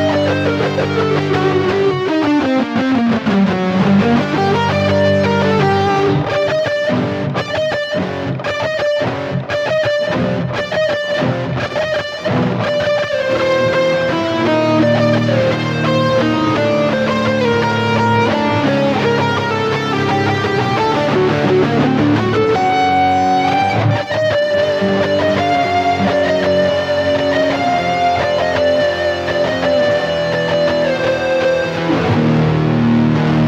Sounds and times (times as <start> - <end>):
Guitar: 0.0 - 33.4.